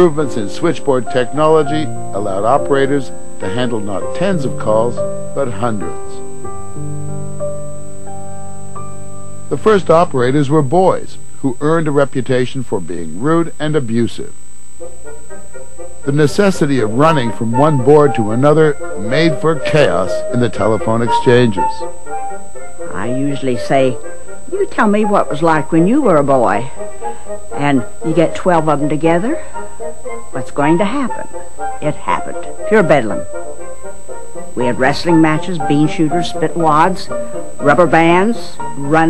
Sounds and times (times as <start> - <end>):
Speech: 0.0 - 6.2, 9.5 - 14.3, 16.1 - 21.8, 22.9 - 26.8, 27.6 - 29.4, 30.4 - 31.2, 31.8 - 33.2, 34.6 - 39.1
Music: 0.0 - 12.9, 14.2 - 39.1.